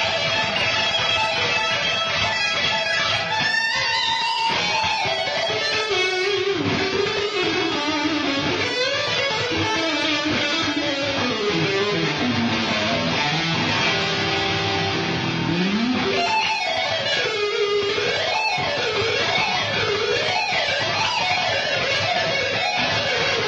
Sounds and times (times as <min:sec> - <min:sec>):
Electric guitar: 0:00.0 - 0:23.4.